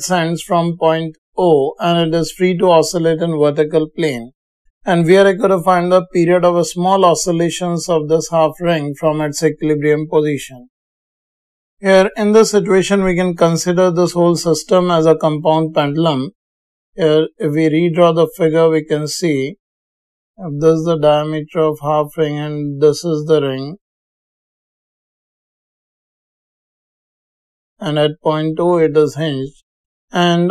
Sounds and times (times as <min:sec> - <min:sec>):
Speech: 0:00.0 - 0:04.3, 0:04.9 - 0:10.7, 0:11.8 - 0:16.4, 0:17.0 - 0:19.6, 0:20.4 - 0:23.8, 0:27.8 - 0:29.6, 0:30.2 - 0:30.5.